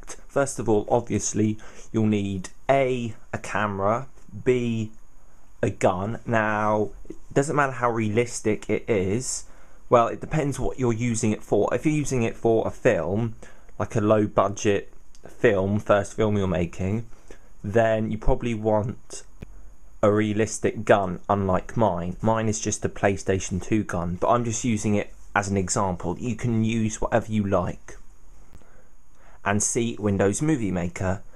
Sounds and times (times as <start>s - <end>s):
Speech: 0.0s - 5.0s, 5.6s - 19.3s, 20.0s - 28.0s, 29.4s - 31.3s.